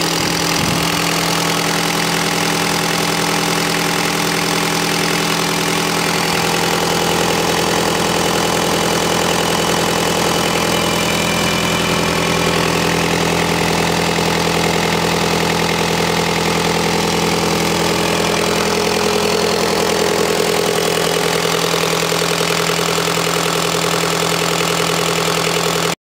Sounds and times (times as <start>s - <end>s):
Idling: 0.0s - 26.0s
Medium engine (mid frequency): 0.0s - 26.0s.